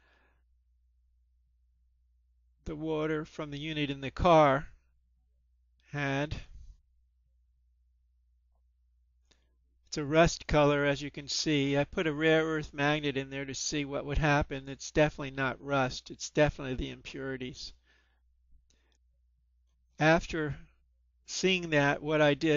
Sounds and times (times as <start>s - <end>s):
Speech: 2.7s - 4.8s, 5.9s - 6.6s, 9.9s - 17.8s, 20.0s - 20.7s, 21.3s - 22.5s.